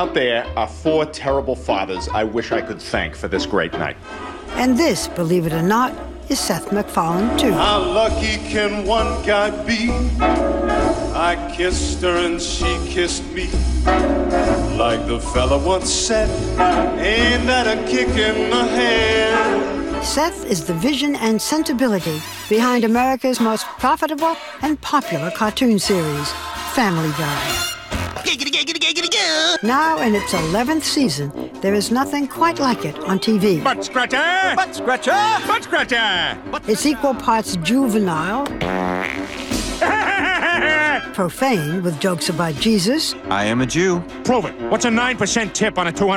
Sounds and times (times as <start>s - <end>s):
Music: 0.0s - 46.1s.